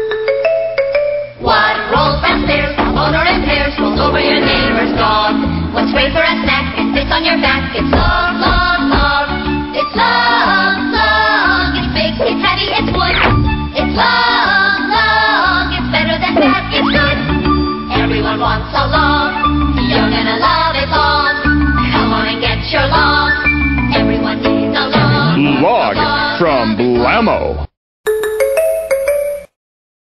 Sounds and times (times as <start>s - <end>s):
Music: 0.0s - 29.4s
Speech: 25.3s - 27.7s.